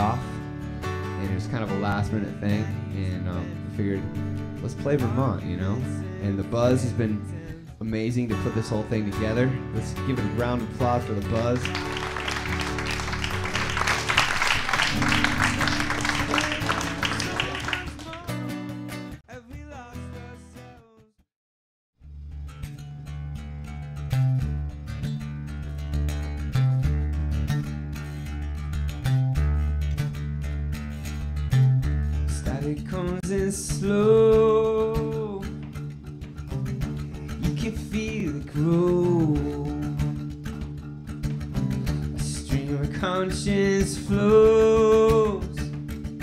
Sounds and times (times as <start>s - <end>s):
Speech: 1.2s - 11.8s
Rock music: 11.0s - 20.5s.